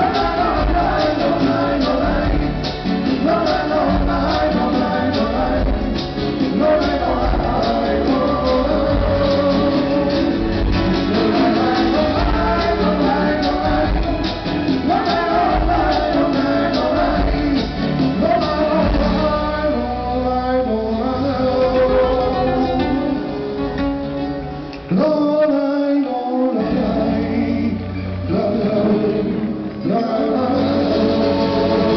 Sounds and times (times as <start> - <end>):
Vocal music: 0.0 - 31.9.